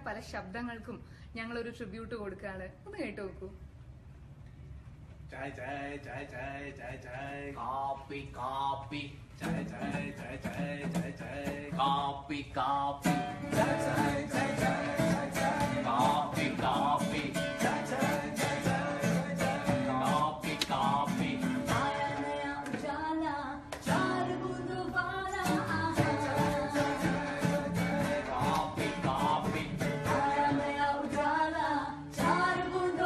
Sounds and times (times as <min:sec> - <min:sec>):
Music: 0:09.4 - 0:12.1, 0:13.0 - 0:23.0, 0:23.8 - 0:33.0.